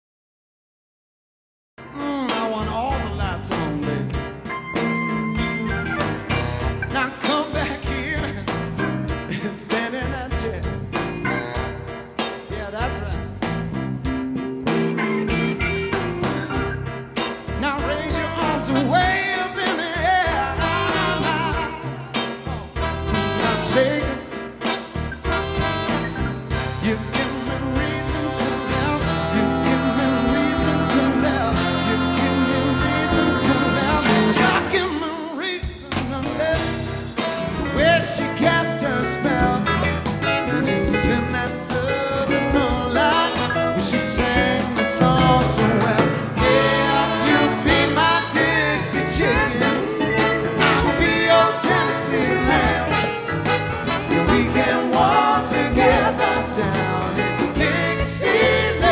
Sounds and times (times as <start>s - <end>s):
Music: 1.8s - 58.9s
Male singing: 1.9s - 4.2s, 6.9s - 8.6s, 9.3s - 10.7s, 17.6s - 21.8s, 23.2s - 24.3s, 26.8s - 36.9s, 37.8s - 39.8s, 40.5s - 50.0s, 50.6s - 53.0s, 54.1s - 58.9s.